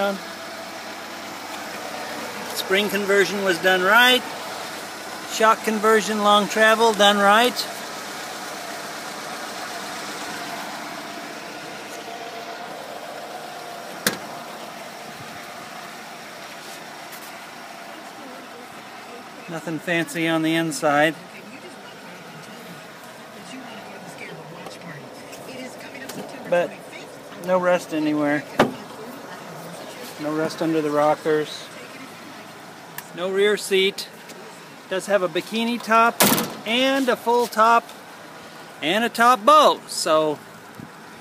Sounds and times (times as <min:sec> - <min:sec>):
Outside, urban or manmade: 0:00.0 - 0:41.2
Vehicle: 0:00.0 - 0:41.2.